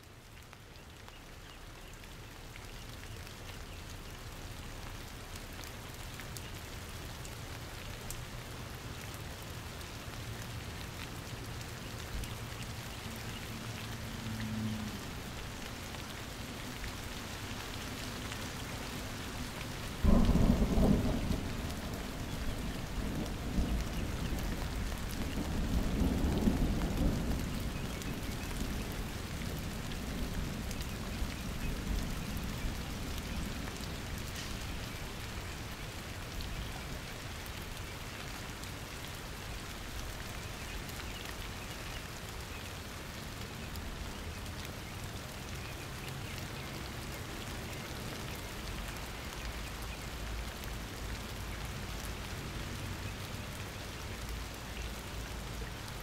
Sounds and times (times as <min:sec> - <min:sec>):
Rain on surface: 0:00.0 - 0:56.0.